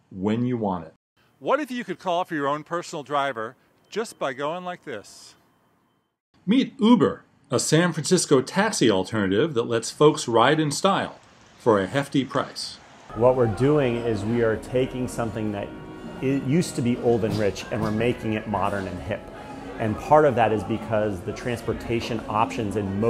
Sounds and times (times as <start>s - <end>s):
Speech: 0.1s - 5.4s, 6.4s - 19.2s, 19.8s - 23.0s
Music: 13.1s - 23.0s.